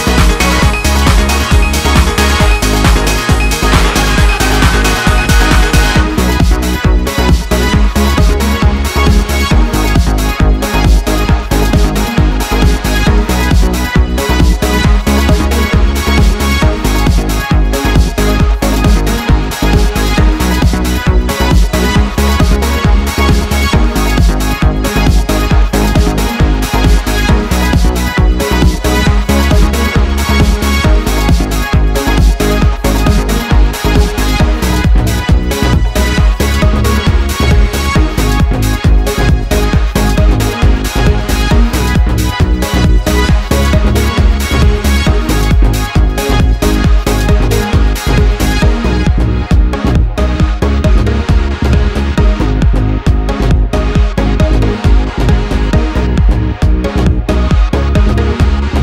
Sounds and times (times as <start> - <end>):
Trance music: 0.0 - 58.8.